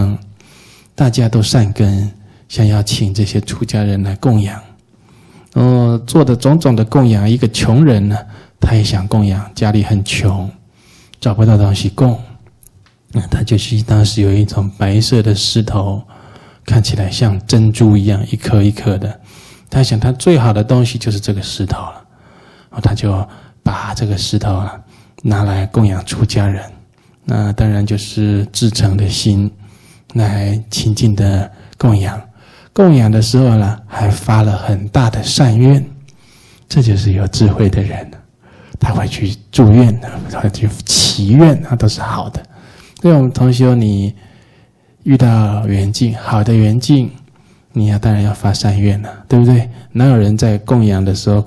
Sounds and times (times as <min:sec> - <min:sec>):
Speech: 0:00.0 - 0:00.3, 0:01.0 - 0:04.8, 0:05.6 - 0:10.6, 0:11.2 - 0:12.4, 0:13.1 - 0:16.1, 0:16.7 - 0:22.1, 0:22.8 - 0:36.0, 0:36.7 - 0:44.2, 0:45.0 - 0:51.4.